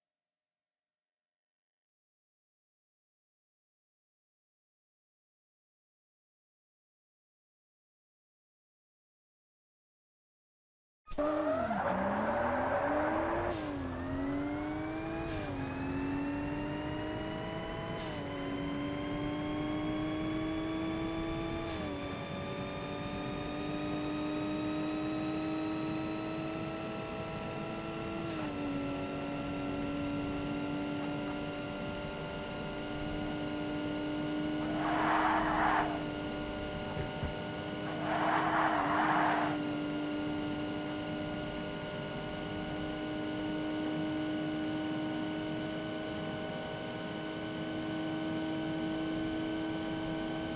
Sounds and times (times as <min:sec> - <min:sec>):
Car: 0:11.1 - 0:50.5.